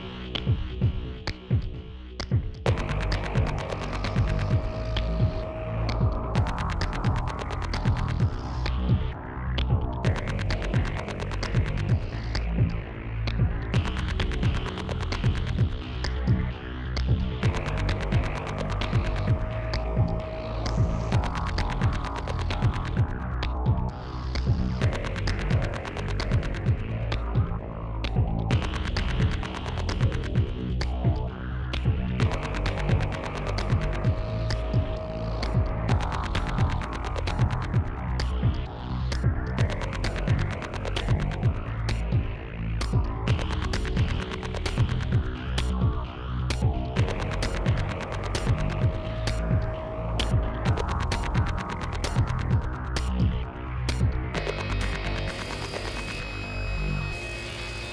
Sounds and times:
Music: 0:00.0 - 0:57.9.

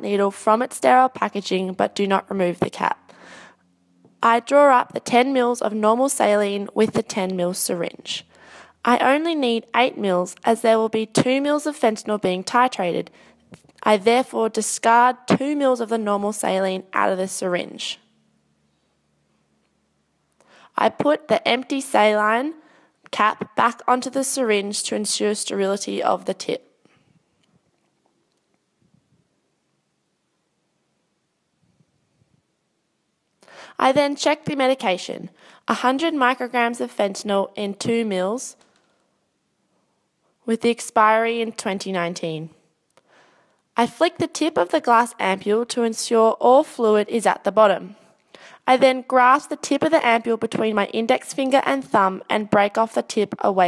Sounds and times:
Speech: 0:00.0 - 0:03.0, 0:04.2 - 0:13.1, 0:13.8 - 0:18.0, 0:20.8 - 0:26.7, 0:33.8 - 0:38.6, 0:40.5 - 0:42.6, 0:43.8 - 0:48.0, 0:48.7 - 0:53.6.

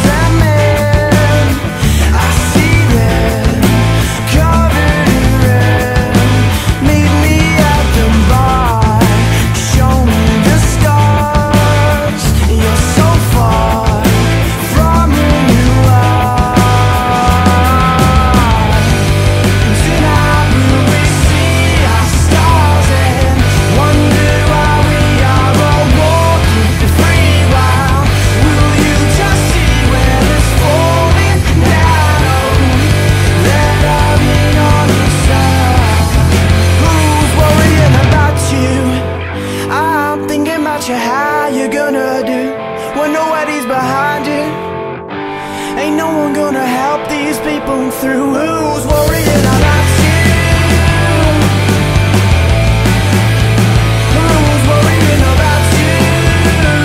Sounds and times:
Pop music: 0:00.0 - 0:56.8.

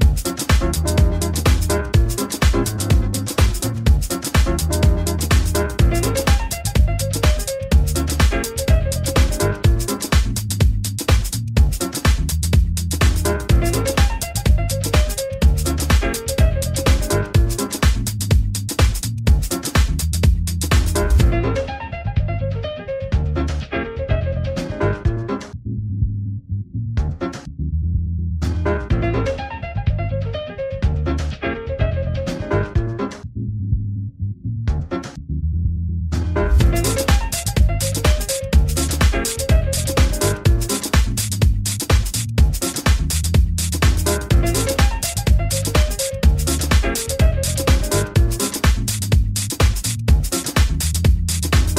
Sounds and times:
Music: 0:00.0 - 0:25.6, 0:27.0 - 0:27.6, 0:28.4 - 0:33.3, 0:34.7 - 0:35.2, 0:36.2 - 0:51.7.

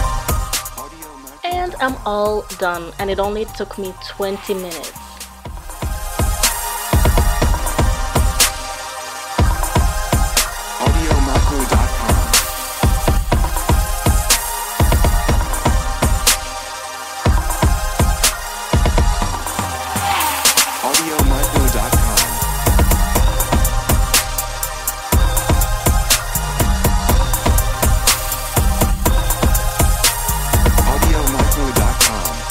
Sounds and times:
Electronic music: 0:00.0 - 0:32.5.

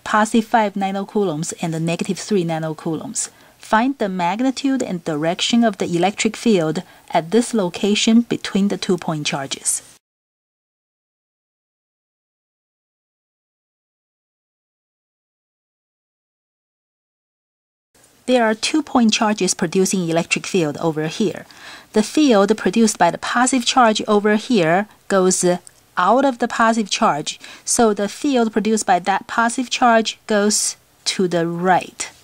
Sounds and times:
Speech: 0:00.0 - 0:10.0, 0:18.3 - 0:32.2.

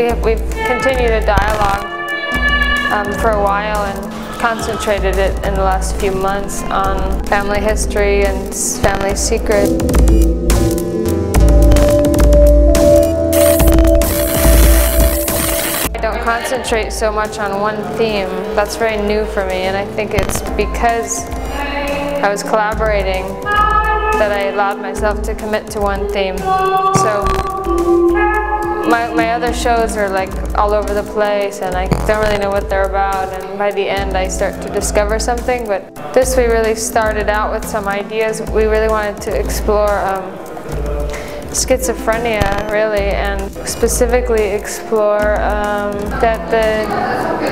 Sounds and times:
Music: 0:00.0 - 0:47.5.

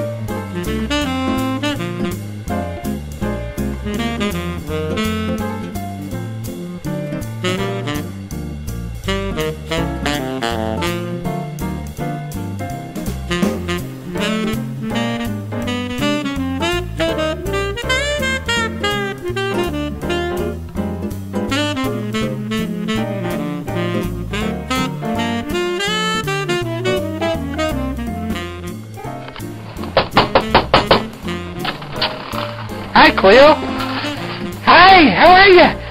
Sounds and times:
Music: 0:00.0 - 0:35.9
Knock: 0:29.9 - 0:31.2
Speech: 0:33.0 - 0:33.8, 0:34.6 - 0:35.9.

